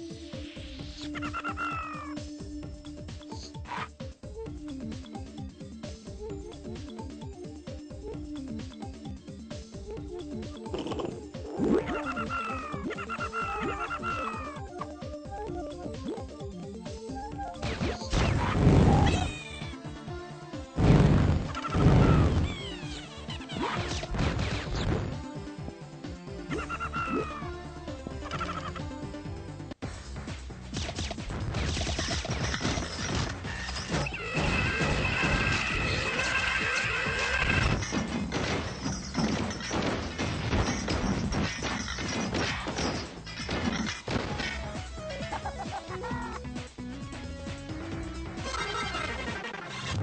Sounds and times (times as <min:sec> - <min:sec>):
Music: 0:00.0 - 0:50.0.